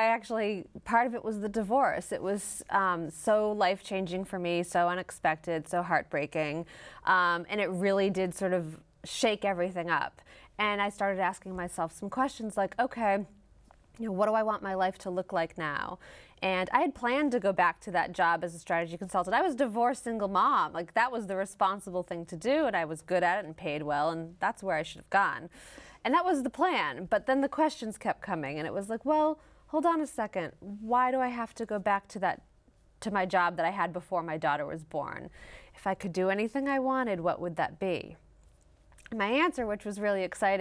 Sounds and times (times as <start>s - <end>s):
Female speech, woman speaking: 0.0s - 13.3s, 14.0s - 25.5s, 26.1s - 32.4s, 33.0s - 38.2s, 39.0s - 40.6s.